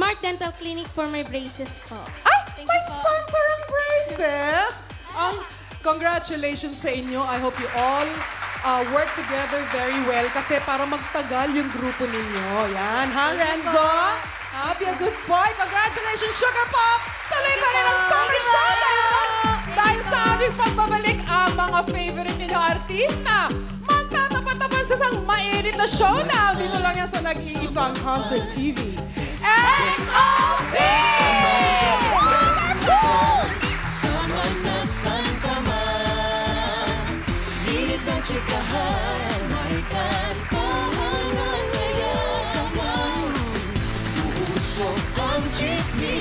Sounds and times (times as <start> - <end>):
Music of Asia: 0.0 - 46.2
Singing: 29.4 - 46.2.